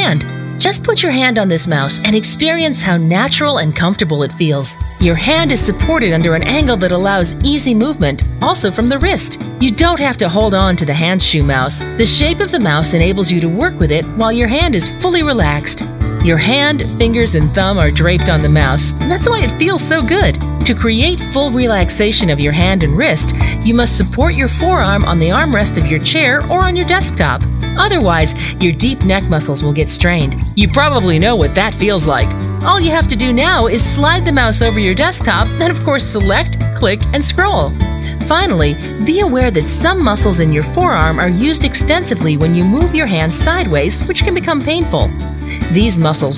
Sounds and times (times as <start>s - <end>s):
Music: 0.0s - 46.3s
Speech: 0.0s - 46.3s.